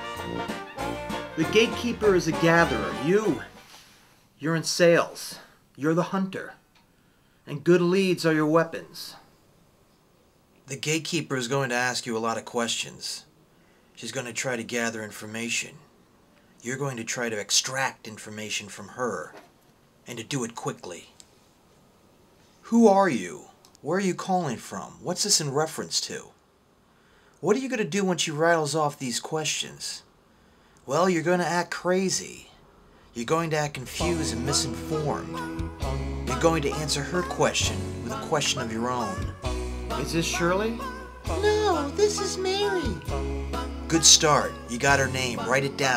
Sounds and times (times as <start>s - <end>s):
Speech: 1.4s - 3.5s, 4.4s - 6.6s, 7.5s - 9.3s, 10.7s - 13.3s, 14.0s - 15.9s, 16.6s - 21.2s, 22.6s - 26.4s, 27.4s - 30.1s, 30.9s - 32.6s, 33.2s - 35.3s, 36.3s - 39.2s, 40.0s - 43.1s, 43.9s - 45.9s.